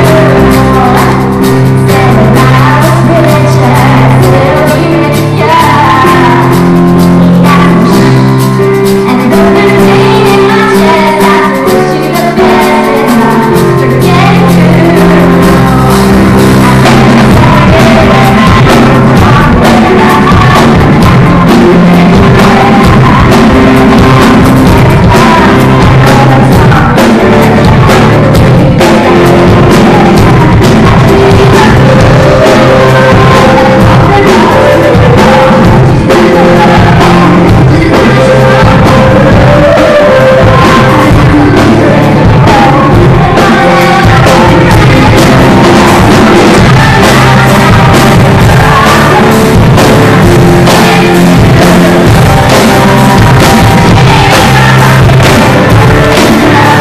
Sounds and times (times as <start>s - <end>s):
Female singing: 0.0s - 8.3s, 9.0s - 56.8s
Music: 0.0s - 56.8s.